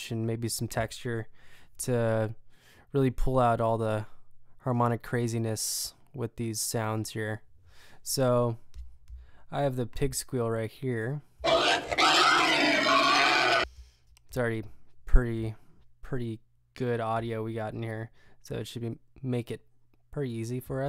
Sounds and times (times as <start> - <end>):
Speech: 0.0 - 2.4, 9.6 - 13.7, 14.3 - 20.8.